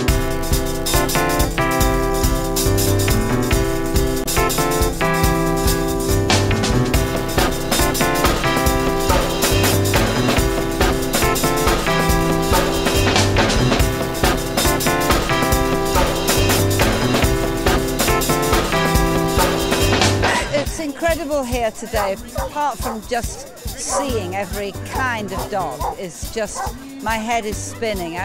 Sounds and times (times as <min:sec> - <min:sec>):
Music: 0:00.0 - 0:28.2
Speech: 0:20.3 - 0:28.2
Bow-wow: 0:22.0 - 0:24.3, 0:24.9 - 0:26.8.